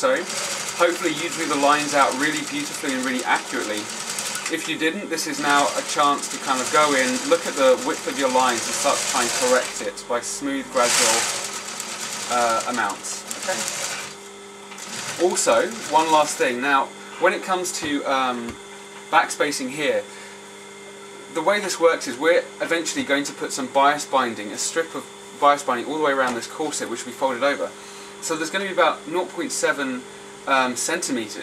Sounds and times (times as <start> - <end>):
Speech: 0.0 - 3.9, 4.5 - 11.4, 12.3 - 13.7, 15.2 - 20.1, 21.3 - 31.4
Sewing machine: 0.0 - 16.6.